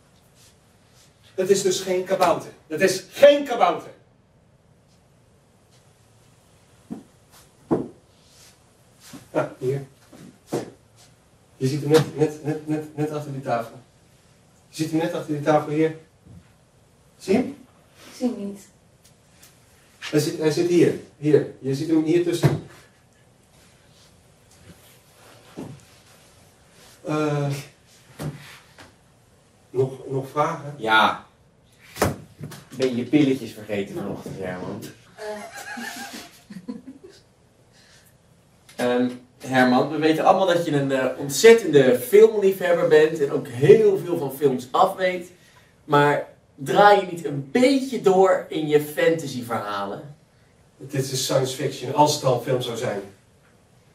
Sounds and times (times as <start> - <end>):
Speech: 1.4 - 4.0, 9.3 - 9.9, 11.6 - 13.8, 14.7 - 16.0, 17.2 - 17.6, 20.0 - 22.7, 27.0 - 27.8, 29.8 - 31.3, 32.8 - 35.4, 38.8 - 50.2, 50.8 - 53.2.